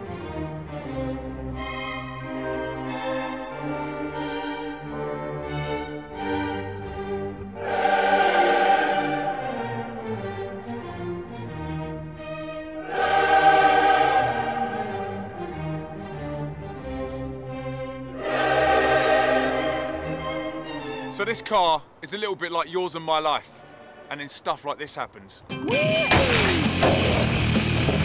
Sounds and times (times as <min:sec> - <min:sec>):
Smash, crash: 0:26.1 - 0:27.4.